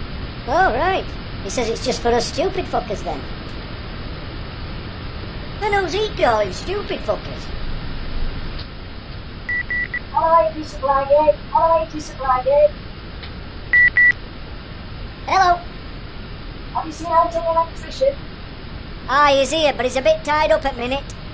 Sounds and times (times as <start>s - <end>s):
Speech: 0.5s - 3.3s, 5.6s - 7.5s, 10.2s - 12.7s, 15.3s - 15.7s, 16.8s - 18.2s, 19.1s - 21.2s.